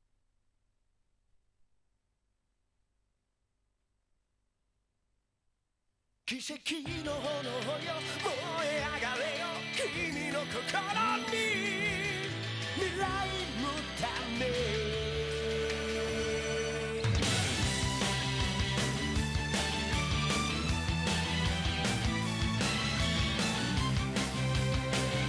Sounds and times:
Music: 0:06.3 - 0:25.2.

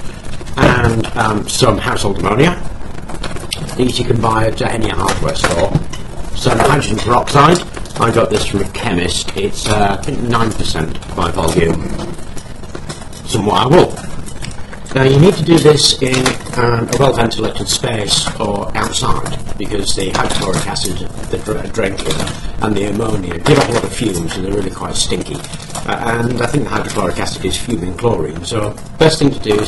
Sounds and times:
Speech: 0:00.6 - 0:02.7, 0:03.6 - 0:05.8, 0:06.4 - 0:12.1, 0:13.3 - 0:14.0, 0:14.9 - 0:29.6.

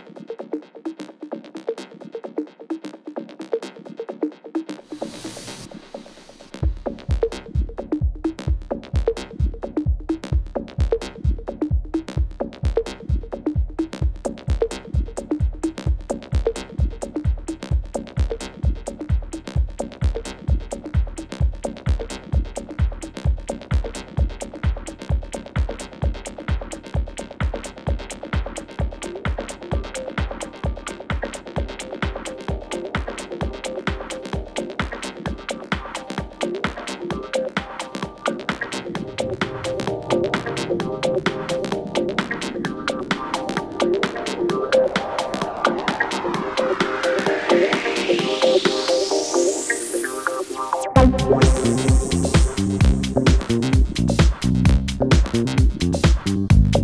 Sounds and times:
Dance music: 0:00.0 - 0:56.8.

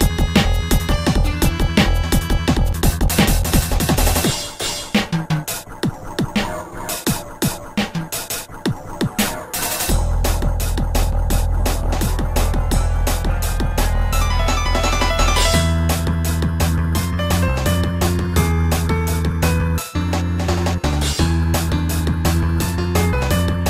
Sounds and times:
Music: 0:00.0 - 0:23.7.

